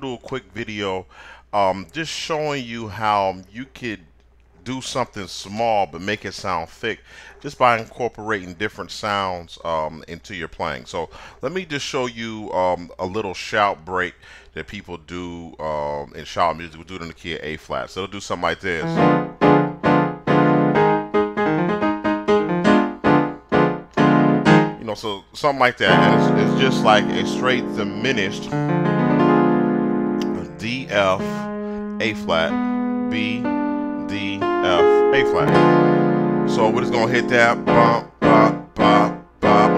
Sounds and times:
Speech: 0:00.0 - 0:19.0, 0:24.8 - 0:28.6, 0:30.2 - 0:35.6, 0:36.5 - 0:39.7
Music: 0:18.8 - 0:24.8, 0:25.8 - 0:39.7.

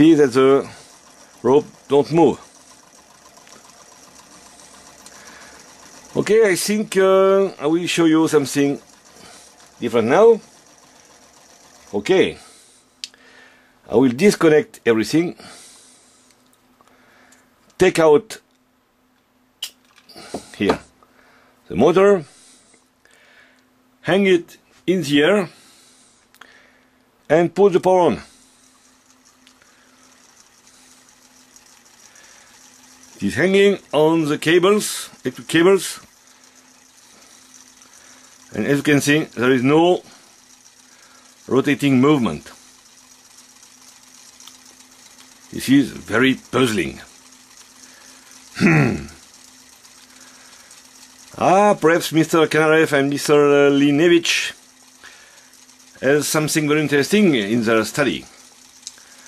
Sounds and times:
Speech: 0:00.0 - 0:00.8, 0:01.4 - 0:02.5, 0:06.2 - 0:08.8, 0:09.8 - 0:10.4, 0:11.9 - 0:12.5, 0:13.9 - 0:15.4, 0:17.8 - 0:18.5, 0:20.6 - 0:20.9, 0:21.7 - 0:22.3, 0:24.0 - 0:25.6, 0:27.3 - 0:28.3, 0:33.2 - 0:36.1, 0:38.5 - 0:40.1, 0:41.5 - 0:42.6, 0:45.5 - 0:47.1, 0:51.4 - 0:54.6, 0:56.0 - 0:58.3.

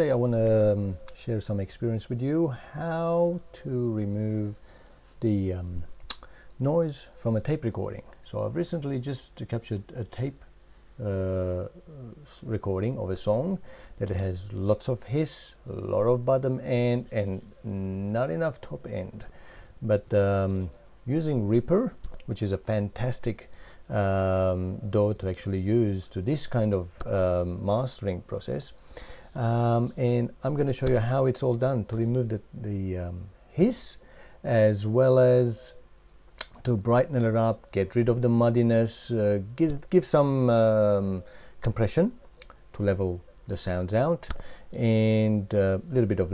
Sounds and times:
Speech: 0:00.0 - 0:04.6, 0:05.2 - 0:05.9, 0:06.6 - 0:28.8, 0:29.4 - 0:35.8, 0:36.4 - 0:46.3.

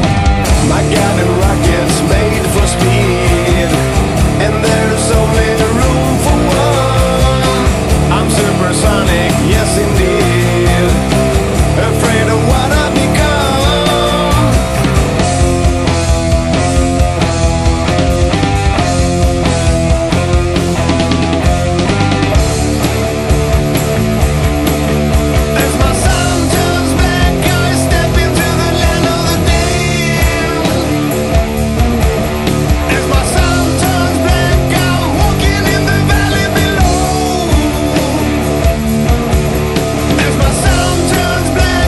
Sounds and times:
Music: 0:00.0 - 0:41.8.

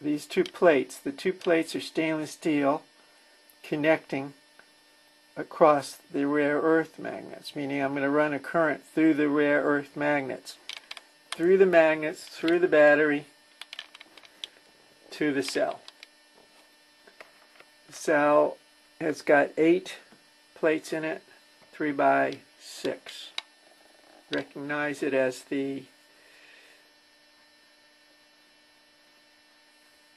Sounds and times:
Speech: 0:00.0 - 0:02.9, 0:03.6 - 0:04.4, 0:05.4 - 0:10.6, 0:11.4 - 0:13.3, 0:15.1 - 0:15.9, 0:17.9 - 0:23.4, 0:24.3 - 0:25.9.

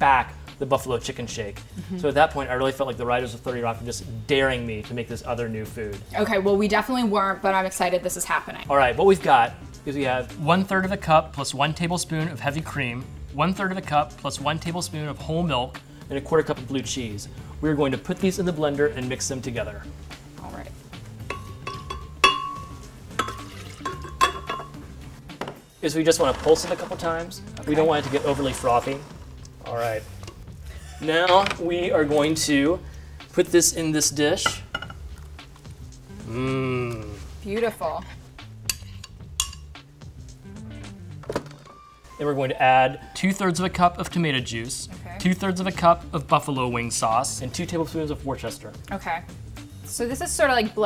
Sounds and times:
Music: 0:00.0 - 0:50.8.

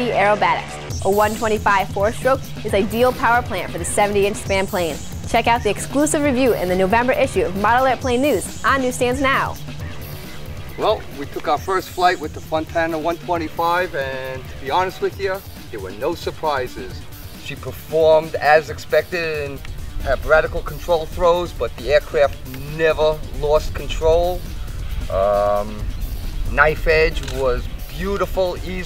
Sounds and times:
Music: 0:00.0 - 0:28.8
Speech: 0:10.8 - 0:24.4, 0:26.5 - 0:28.8.

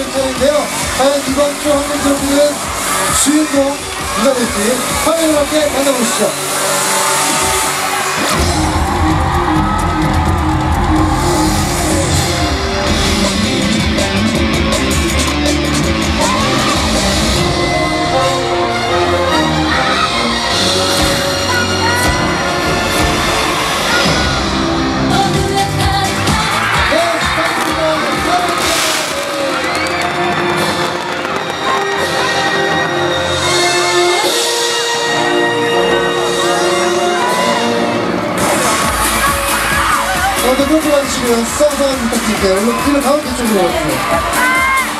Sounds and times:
Male speech, man speaking: 0:00.0 - 0:02.6, 0:03.2 - 0:06.4, 0:26.9 - 0:28.9, 0:40.4 - 0:44.2
Music: 0:00.0 - 0:44.9.

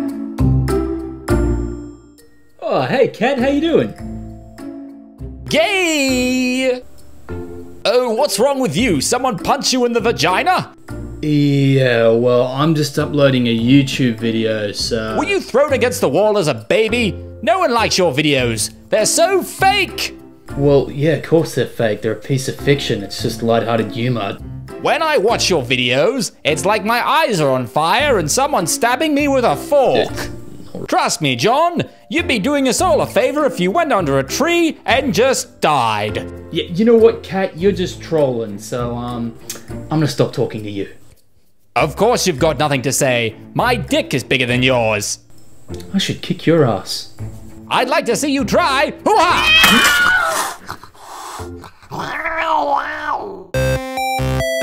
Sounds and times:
Music: 0:00.0 - 0:52.5, 0:53.6 - 0:54.6
Speech: 0:02.6 - 0:04.0, 0:05.5 - 0:06.8, 0:07.9 - 0:41.0, 0:41.8 - 0:45.2, 0:45.8 - 0:47.1, 0:47.7 - 0:49.6.

